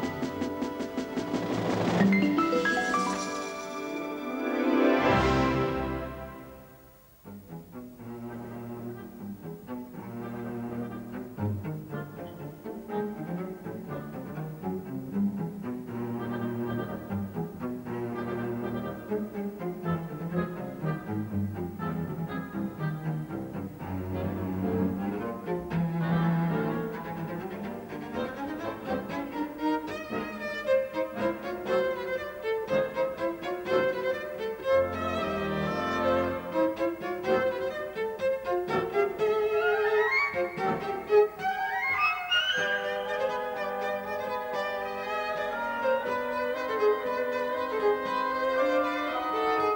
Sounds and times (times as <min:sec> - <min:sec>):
Cello: 0:00.0 - 0:49.7.